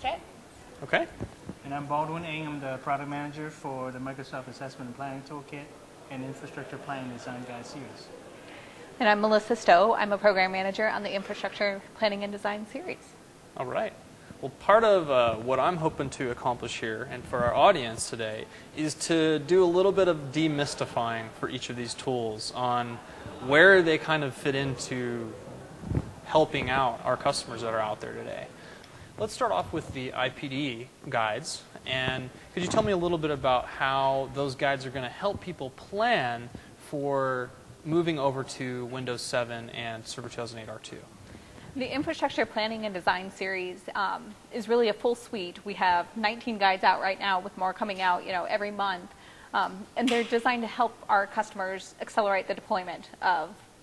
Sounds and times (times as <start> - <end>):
Speech: 13.6 - 13.9, 31.4 - 35.6.